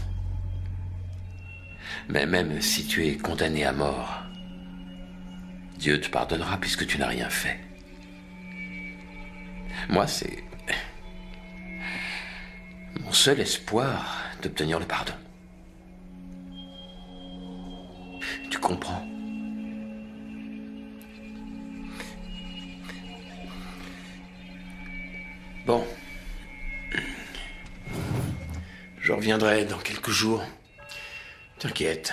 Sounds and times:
Music: 0:00.0 - 0:32.1
Male speech, man speaking: 0:02.1 - 0:04.2, 0:05.8 - 0:07.7, 0:09.8 - 0:10.9, 0:13.0 - 0:15.3, 0:18.4 - 0:19.1, 0:25.7 - 0:26.0, 0:29.0 - 0:30.6, 0:31.6 - 0:32.1.

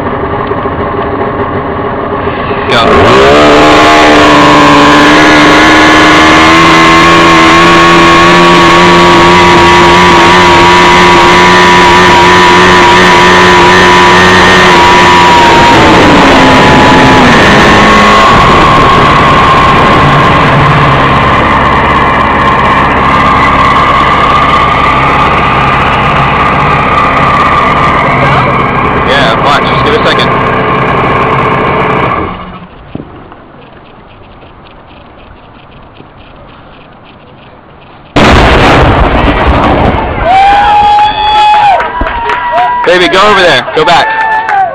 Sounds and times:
Outside, rural or natural: 0:00.0 - 0:44.7
Explosion: 0:14.2 - 0:30.2, 0:38.2 - 0:42.2.

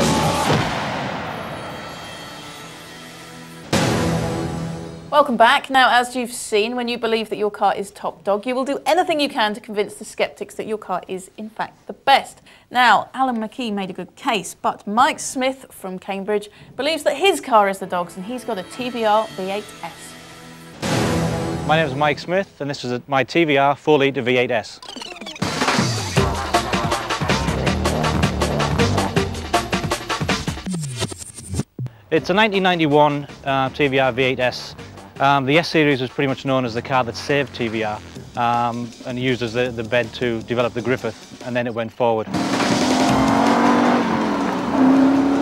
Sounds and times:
Music: 0:00.0 - 0:05.4, 0:17.4 - 0:22.6, 0:24.8 - 0:43.4
Speech: 0:21.7 - 0:24.8, 0:32.1 - 0:42.3.

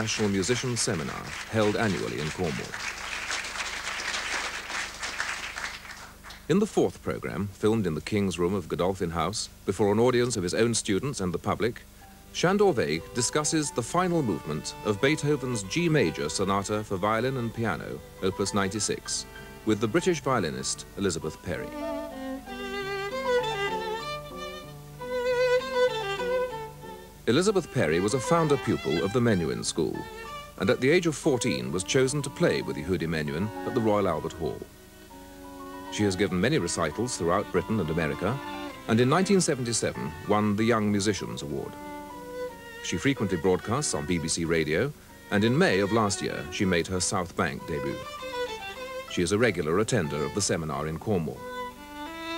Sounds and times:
Speech: 0:00.0 - 0:02.8, 0:06.5 - 0:11.8, 0:12.4 - 0:21.8, 0:27.3 - 0:34.7, 0:35.9 - 0:41.8, 0:42.8 - 0:48.1, 0:49.1 - 0:51.4
Violin, fiddle: 0:00.0 - 0:02.8, 0:10.6 - 0:52.3.

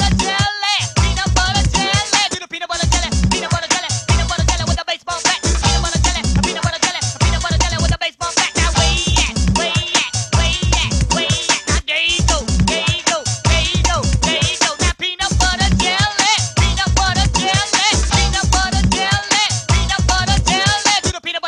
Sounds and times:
Music: 0:00.0 - 0:21.4.

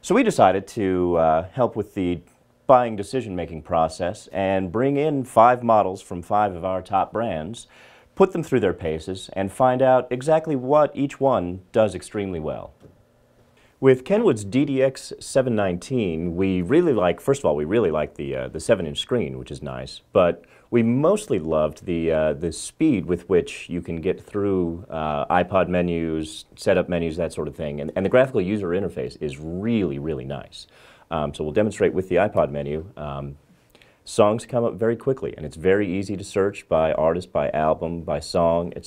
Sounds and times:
Speech: 0:00.0 - 0:12.8, 0:13.8 - 0:38.8.

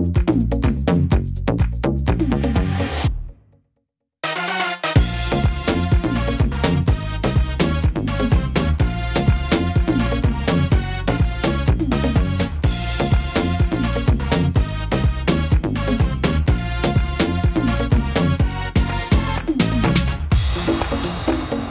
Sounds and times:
Dance music: 0:00.0 - 0:03.2, 0:04.2 - 0:21.7
Electronic dance music: 0:00.0 - 0:03.3, 0:04.2 - 0:21.7
Electronica: 0:04.2 - 0:21.7
Trance music: 0:04.2 - 0:21.7
Techno: 0:04.3 - 0:21.7
Dubstep: 0:19.1 - 0:21.7.

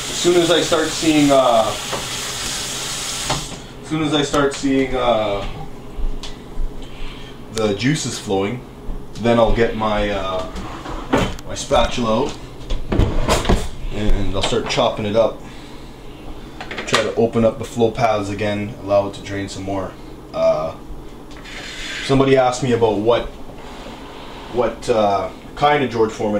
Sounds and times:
Speech: 0:00.1 - 0:01.8, 0:03.8 - 0:05.6, 0:07.5 - 0:10.6, 0:11.5 - 0:12.4, 0:13.9 - 0:15.4, 0:16.8 - 0:20.8, 0:22.0 - 0:23.4, 0:24.5 - 0:26.3.

